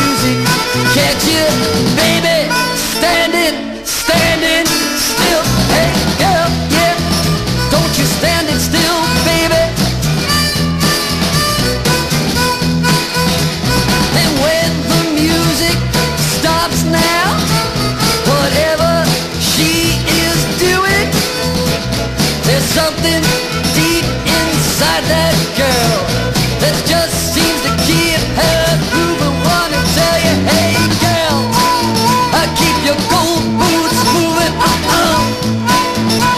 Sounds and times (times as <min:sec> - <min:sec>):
Swing music: 0:00.0 - 0:36.3.